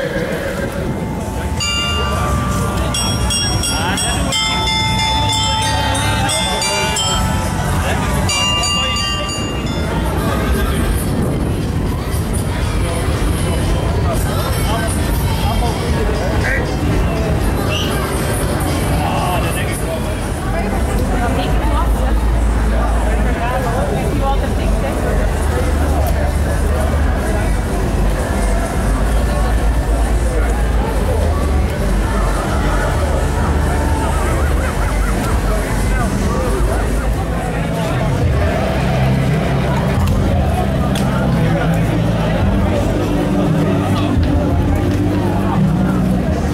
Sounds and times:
Speech: 0:00.0 - 0:46.5
Music: 0:00.9 - 0:46.5.

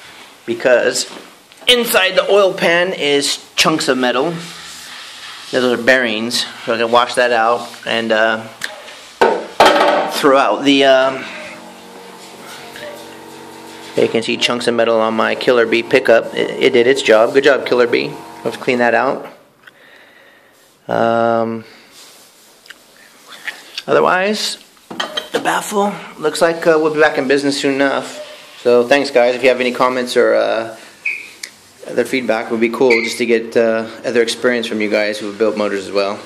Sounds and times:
Speech: 0:00.5 - 0:04.6, 0:05.5 - 0:08.6, 0:10.1 - 0:11.3, 0:14.0 - 0:19.4, 0:20.9 - 0:21.7, 0:25.4 - 0:30.8, 0:31.8 - 0:36.2.

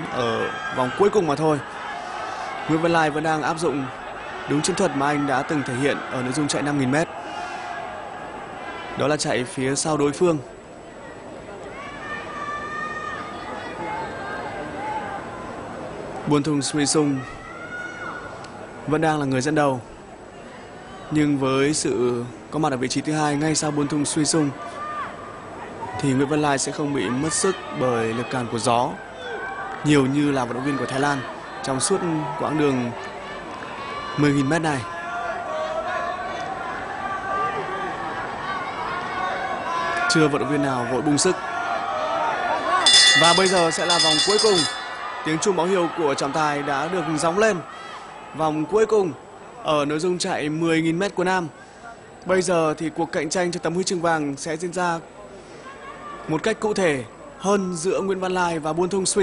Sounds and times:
Outside, urban or manmade: 0:00.0 - 0:59.2.

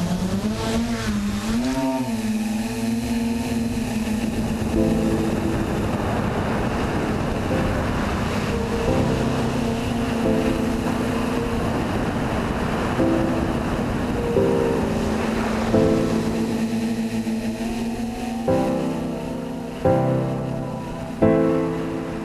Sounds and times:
Outside, rural or natural: 0:00.0 - 0:22.2
Music: 0:04.4 - 0:22.2.

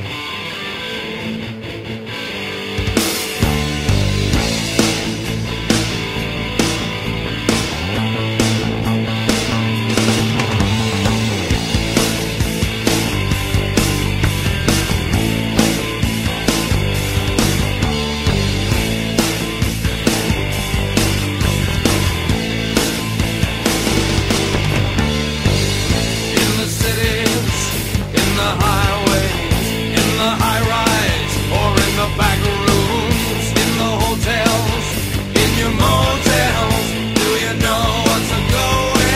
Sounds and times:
Music: 0:00.0 - 0:39.1.

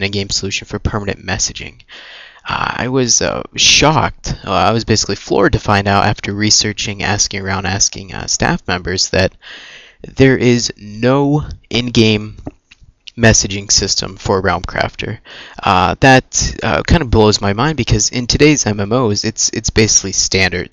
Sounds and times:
Speech: 0:00.0 - 0:09.4, 0:10.0 - 0:20.7.

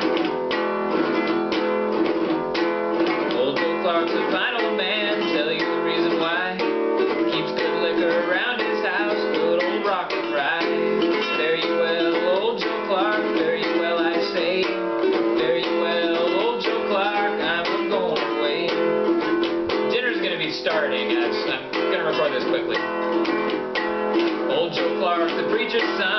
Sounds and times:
Music: 0:00.0 - 0:26.1
Male singing: 0:03.3 - 0:18.8, 0:19.9 - 0:22.8, 0:24.5 - 0:26.1.

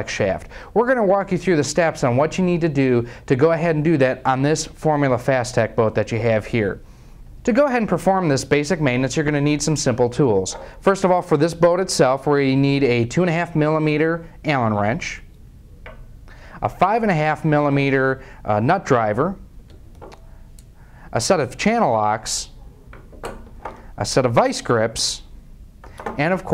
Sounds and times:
Speech: 0:00.0 - 0:06.8, 0:07.4 - 0:15.3, 0:16.6 - 0:19.4, 0:21.1 - 0:22.6, 0:24.0 - 0:25.3, 0:26.2 - 0:26.5.

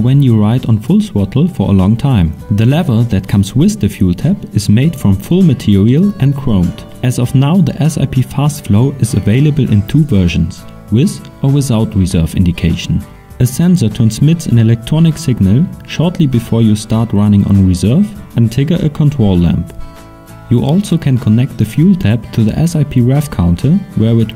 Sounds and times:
Speech: 0:00.0 - 0:19.7, 0:20.5 - 0:24.3
Music: 0:00.0 - 0:24.3.

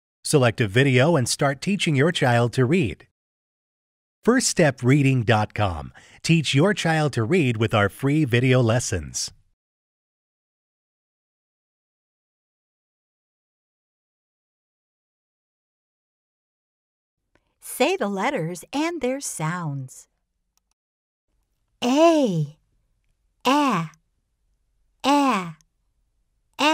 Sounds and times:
Speech: 0:00.2 - 0:03.1, 0:04.2 - 0:09.4, 0:17.6 - 0:20.1, 0:21.8 - 0:22.6, 0:23.5 - 0:24.0, 0:25.0 - 0:25.6.

